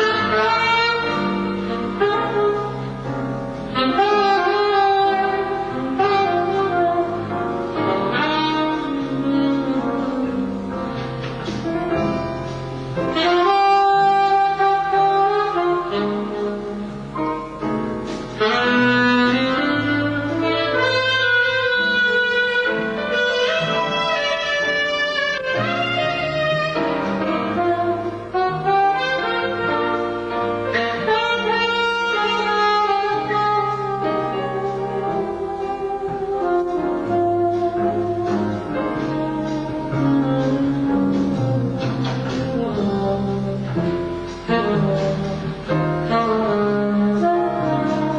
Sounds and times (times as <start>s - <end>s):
Brass instrument: 0.0s - 48.1s
Saxophone: 0.0s - 48.1s.